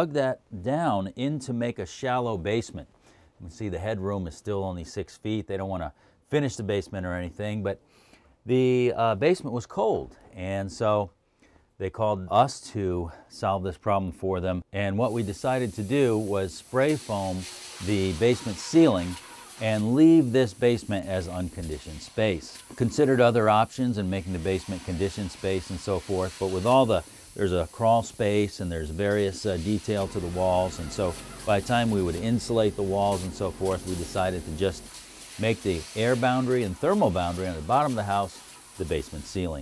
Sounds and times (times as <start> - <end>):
Speech: 0.0 - 7.8, 8.5 - 11.2, 11.8 - 39.6
Spray: 15.0 - 39.6.